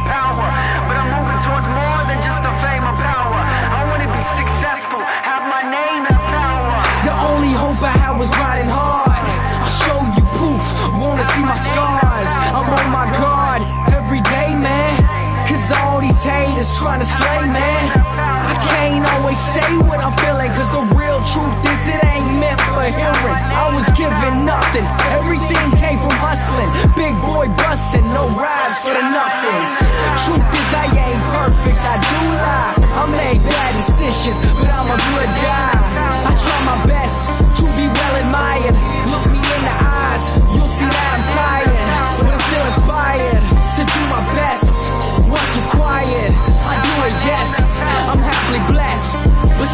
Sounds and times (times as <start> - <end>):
Music: 0.0 - 49.7.